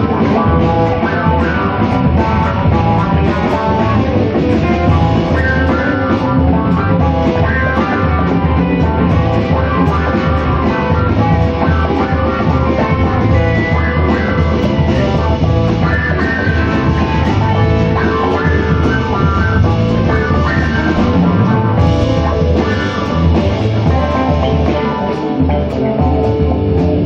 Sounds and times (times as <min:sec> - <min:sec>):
Drum kit: 0:00.0 - 0:27.0
Guitar: 0:00.0 - 0:27.0
Jazz: 0:00.0 - 0:27.0.